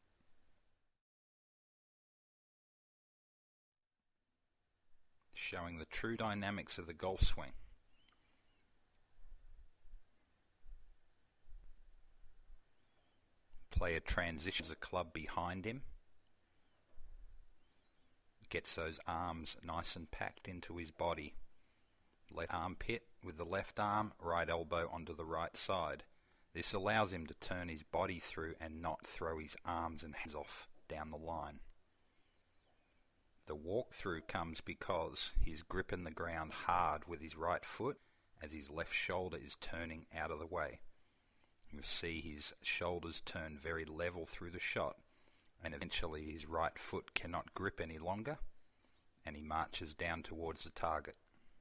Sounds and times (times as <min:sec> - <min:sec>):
Speech: 0:05.3 - 0:07.6, 0:13.7 - 0:16.0, 0:18.4 - 0:21.4, 0:22.3 - 0:31.7, 0:33.4 - 0:40.9, 0:41.7 - 0:45.0, 0:45.6 - 0:48.5, 0:49.2 - 0:51.2.